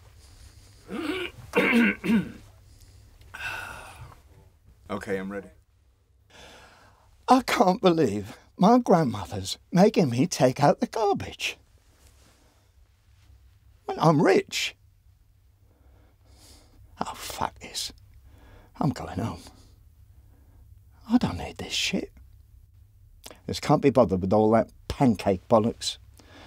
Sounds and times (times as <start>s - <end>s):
Speech: 4.9s - 5.6s, 7.3s - 11.6s, 13.8s - 14.8s, 17.0s - 18.0s, 18.8s - 19.6s, 21.0s - 22.1s, 23.4s - 26.0s.